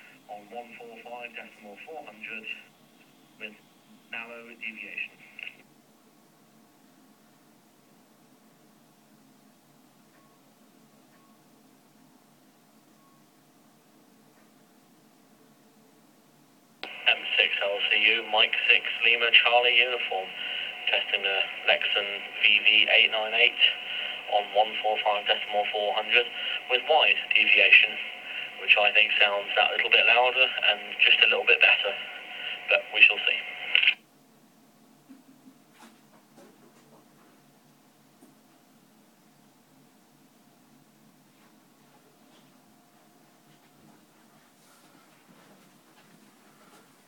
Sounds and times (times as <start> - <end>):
Radio: 0.0 - 5.7, 16.8 - 34.0
Inside, small room: 0.0 - 47.0
Speech: 0.3 - 2.7, 3.4 - 5.6, 16.9 - 34.0.